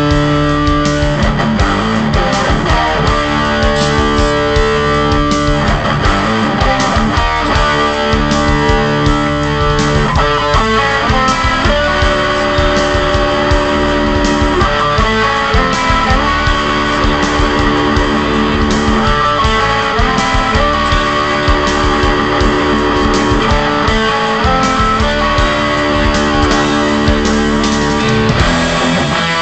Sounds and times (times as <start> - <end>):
Bass guitar: 0.0 - 29.4
Electric guitar: 0.0 - 29.4.